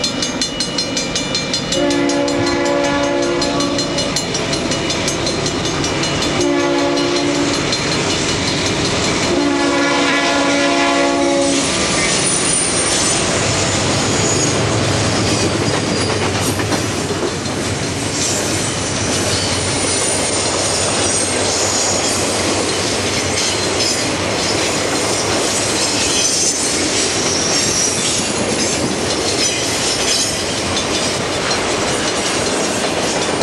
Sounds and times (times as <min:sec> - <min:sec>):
Train horn: 0:01.7 - 0:04.1, 0:06.4 - 0:07.6, 0:09.3 - 0:11.8
Train whistle: 0:01.7 - 0:04.1, 0:06.4 - 0:07.6, 0:09.3 - 0:14.6.